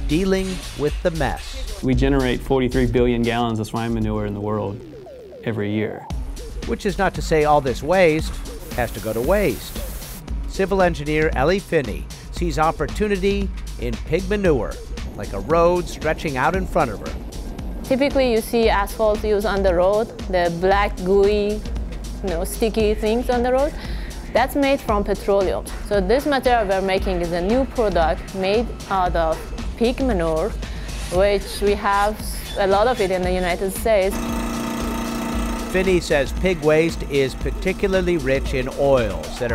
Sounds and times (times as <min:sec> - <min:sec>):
Music: 0:00.0 - 0:39.5
Speech: 0:00.1 - 0:04.8, 0:06.7 - 0:09.6, 0:10.6 - 0:17.2, 0:17.9 - 0:21.6, 0:31.1 - 0:34.1, 0:35.8 - 0:39.5.